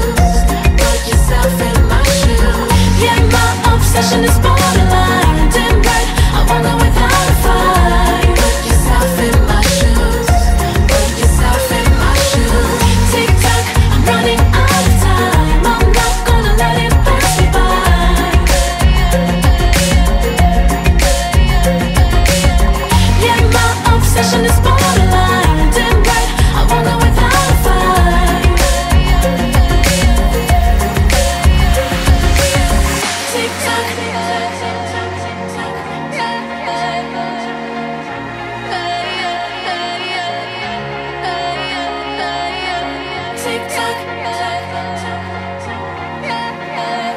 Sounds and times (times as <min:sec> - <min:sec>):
Pop music: 0:00.0 - 0:47.1.